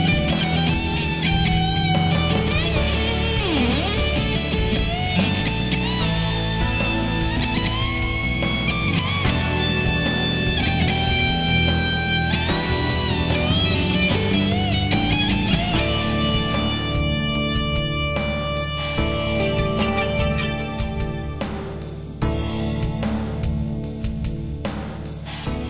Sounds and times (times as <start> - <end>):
Electric guitar: 0.0 - 24.3
Strum: 11.9 - 23.7.